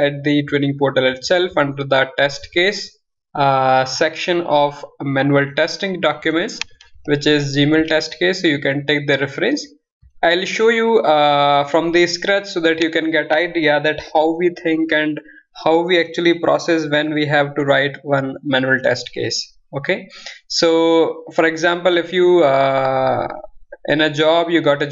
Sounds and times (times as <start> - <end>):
Speech: 0.0 - 24.9.